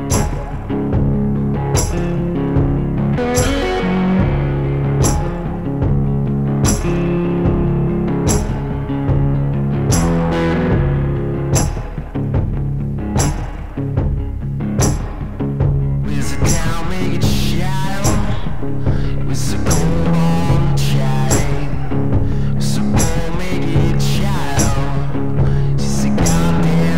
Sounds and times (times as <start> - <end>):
Blues: 0.0 - 26.9
Strum: 0.0 - 26.9.